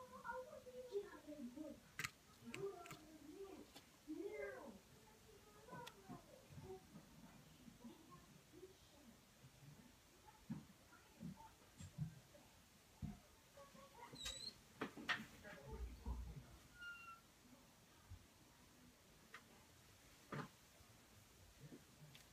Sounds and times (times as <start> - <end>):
Speech: 0.0 - 14.4, 15.2 - 16.6
Inside, small room: 0.0 - 22.3.